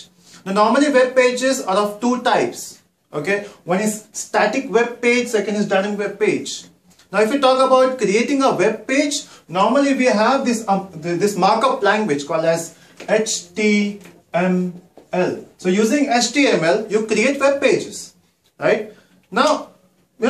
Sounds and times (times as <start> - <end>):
Speech: 0.0 - 20.2.